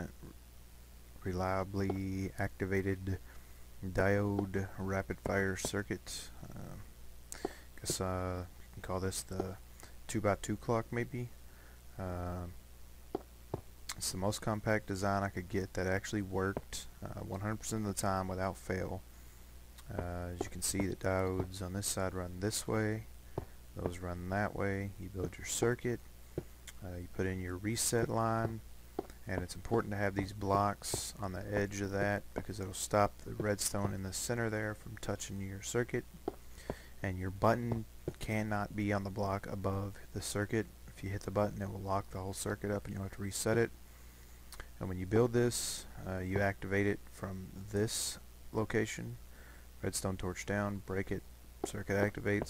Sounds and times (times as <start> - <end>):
Speech: 0.0 - 0.4, 1.2 - 3.2, 3.8 - 6.9, 7.8 - 11.4, 12.0 - 12.6, 13.9 - 19.0, 19.8 - 23.1, 23.8 - 26.0, 26.7 - 28.6, 29.2 - 36.1, 37.0 - 43.8, 44.8 - 49.2, 49.8 - 52.5.